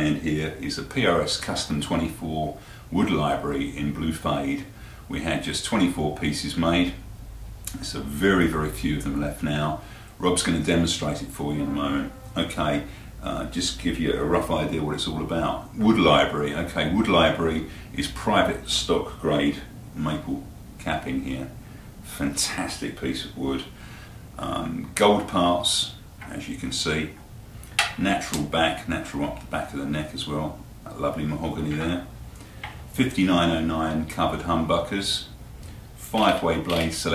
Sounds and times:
Speech: 0.0s - 7.0s, 7.7s - 23.8s, 24.4s - 27.2s, 27.8s - 32.1s, 32.9s - 35.4s, 36.0s - 37.1s.

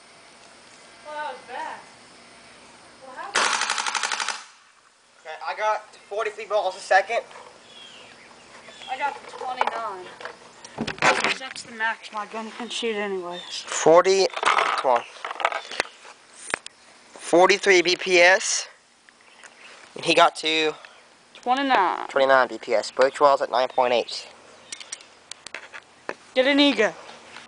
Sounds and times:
Outside, rural or natural: 0.0s - 27.4s.

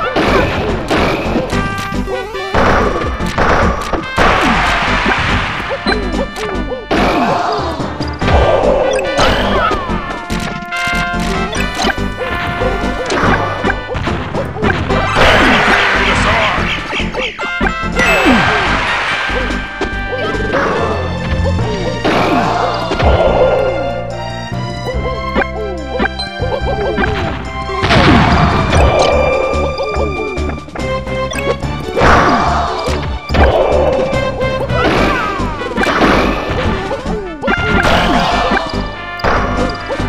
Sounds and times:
Smash, crash: 2.5s - 7.4s, 8.3s - 16.6s, 18.0s - 19.5s, 22.0s - 23.5s, 27.0s - 29.1s, 32.0s - 39.6s.

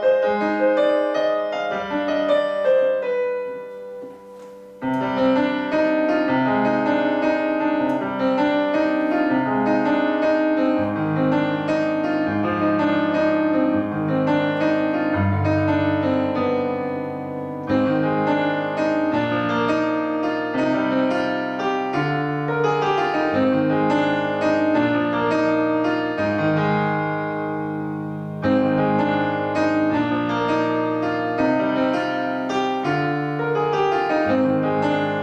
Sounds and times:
Piano: 0.0s - 35.2s.

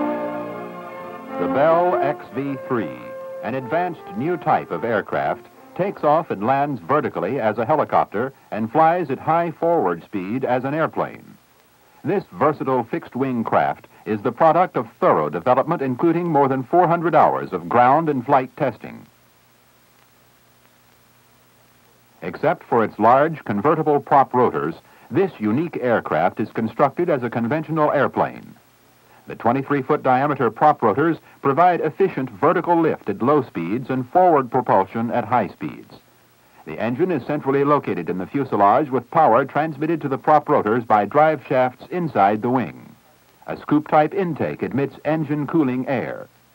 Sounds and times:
Speech: 1.4s - 11.4s, 12.0s - 19.1s, 22.2s - 28.6s, 29.2s - 46.4s.

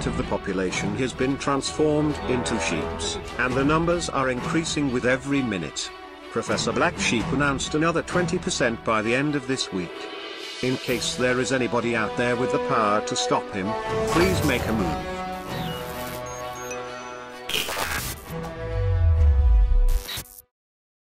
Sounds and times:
Speech: 0.0s - 15.1s
Music: 0.0s - 20.5s.

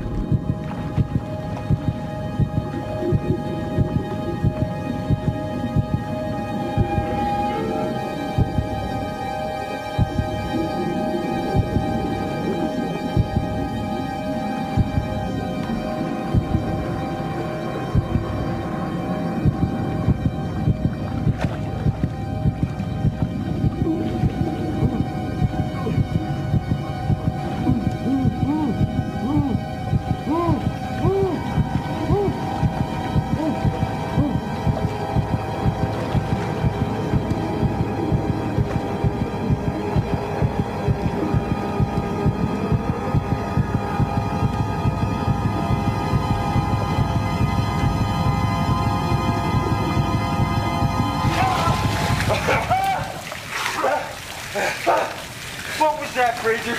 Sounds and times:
Music: 0.0s - 56.7s.

